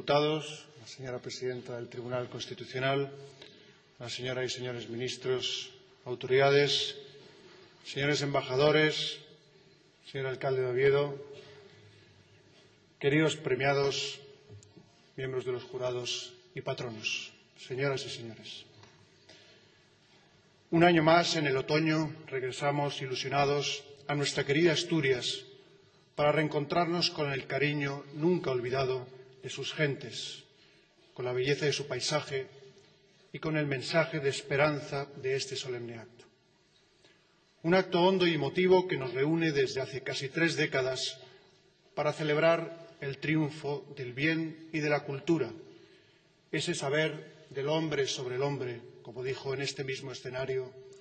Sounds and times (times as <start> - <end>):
Male speech, man speaking: 0.0 - 3.3, 4.0 - 7.2, 7.8 - 9.4, 10.0 - 11.4, 13.0 - 14.4, 15.2 - 18.7, 20.7 - 25.6, 26.2 - 30.5, 31.2 - 32.6, 33.3 - 36.3, 37.6 - 41.2, 42.0 - 45.7, 46.5 - 50.8
Narration, monologue: 0.0 - 51.0.